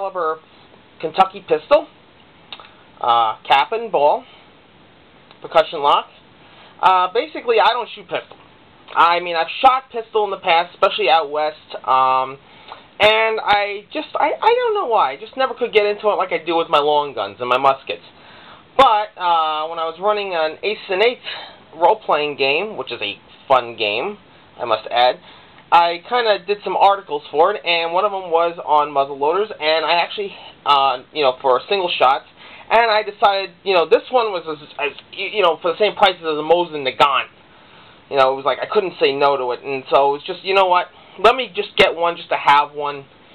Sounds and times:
Speech: 0.0s - 0.4s, 1.0s - 2.0s, 2.6s - 4.4s, 5.4s - 6.2s, 6.8s - 12.4s, 13.0s - 18.2s, 18.8s - 37.4s, 38.1s - 43.1s.

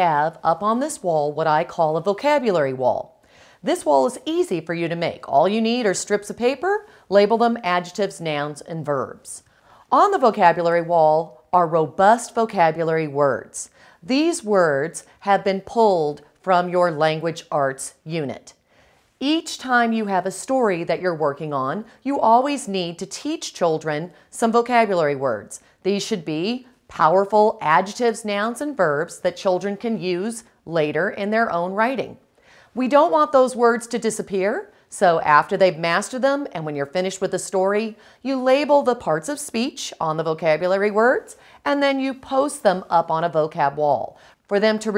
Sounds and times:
Speech: 0.0s - 18.6s, 19.2s - 32.2s, 32.8s - 44.9s.

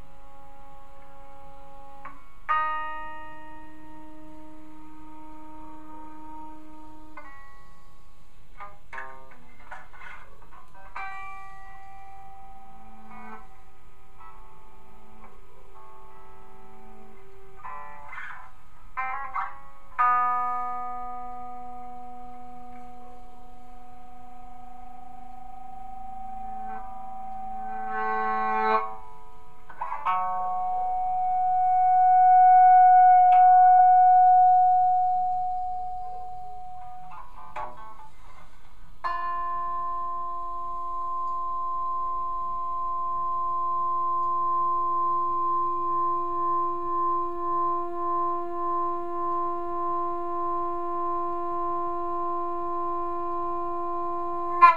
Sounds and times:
Electric guitar: 0.0s - 54.7s.

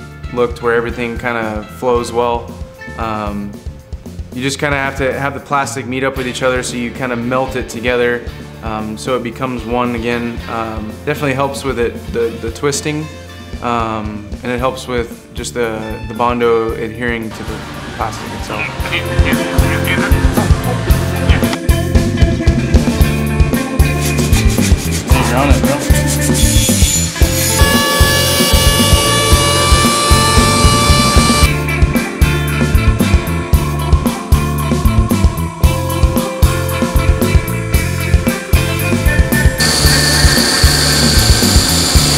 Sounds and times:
Music: 0.0s - 42.1s
Drill: 27.2s - 31.5s, 39.6s - 42.1s.

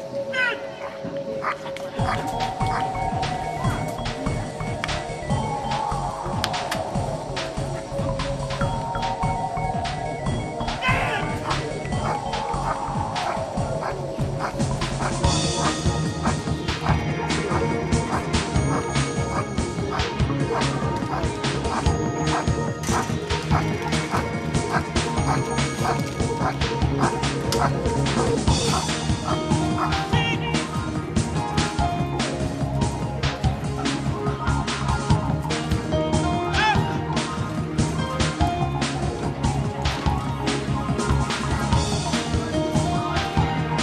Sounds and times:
Music: 0.0s - 43.8s.

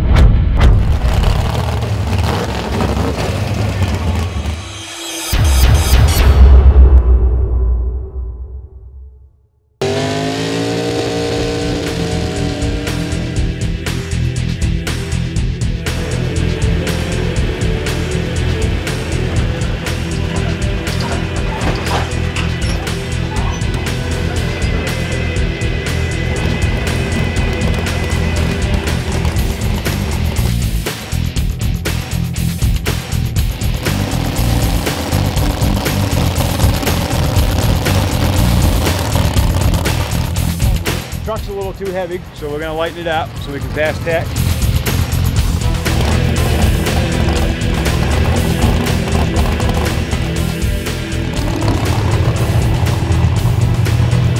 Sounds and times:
Car: 0.6s - 7.0s, 9.8s - 54.3s
Music: 3.8s - 9.6s, 11.2s - 54.3s.

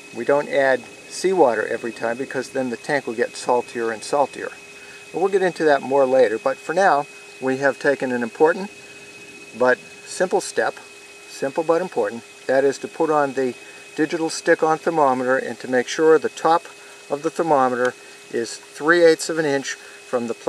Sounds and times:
Outside, rural or natural: 0.0s - 20.4s
Speech: 0.2s - 4.6s, 5.2s - 8.7s, 9.6s - 20.4s.

